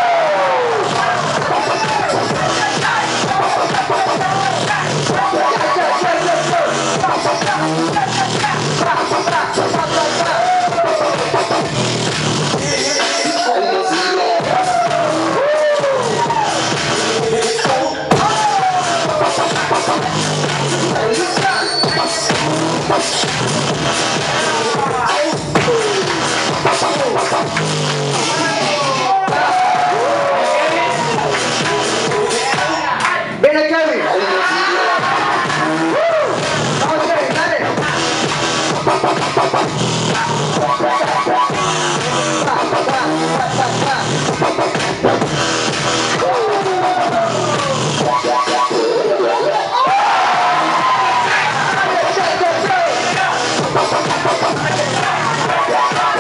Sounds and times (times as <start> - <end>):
Music: 0.0 - 56.2.